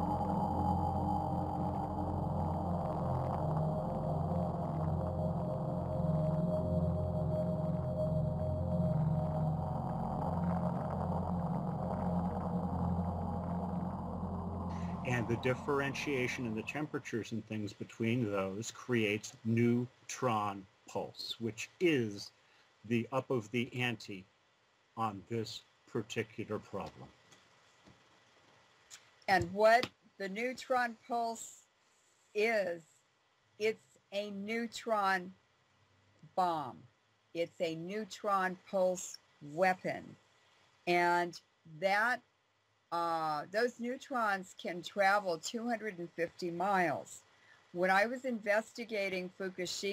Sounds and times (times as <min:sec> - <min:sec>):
Speech: 0:15.1 - 0:22.3, 0:22.9 - 0:24.2, 0:25.0 - 0:27.1, 0:29.3 - 0:31.6, 0:32.4 - 0:32.8, 0:33.6 - 0:35.4, 0:36.4 - 0:36.8, 0:37.4 - 0:40.2, 0:40.9 - 0:42.2, 0:43.0 - 0:47.2, 0:47.8 - 0:49.9.